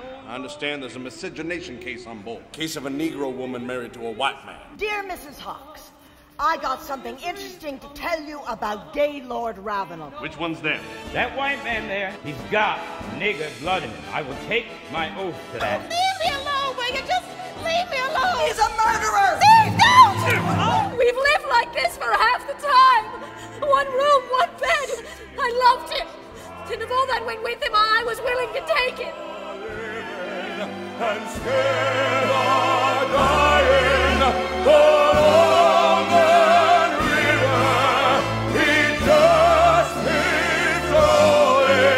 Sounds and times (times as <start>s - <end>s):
Music: 0.0s - 41.9s.